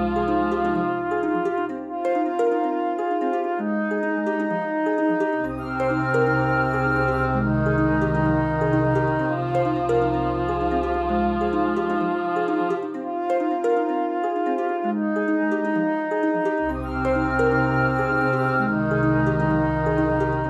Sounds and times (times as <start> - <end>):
Music: 0.0 - 20.5.